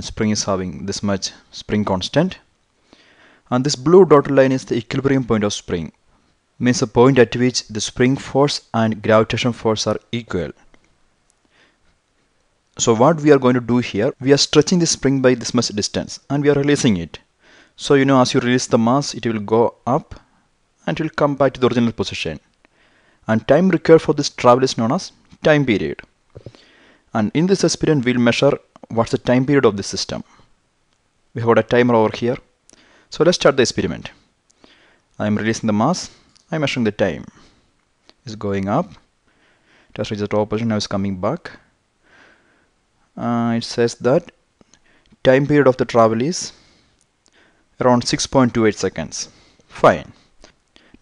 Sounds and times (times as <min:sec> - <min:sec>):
Speech: 0:00.0 - 0:02.5, 0:03.5 - 0:06.0, 0:06.6 - 0:10.6, 0:12.8 - 0:22.5, 0:23.3 - 0:26.1, 0:27.1 - 0:30.4, 0:31.4 - 0:32.5, 0:33.1 - 0:34.2, 0:35.2 - 0:37.4, 0:38.2 - 0:39.0, 0:40.0 - 0:41.7, 0:43.2 - 0:44.4, 0:45.2 - 0:46.6, 0:47.8 - 0:50.2.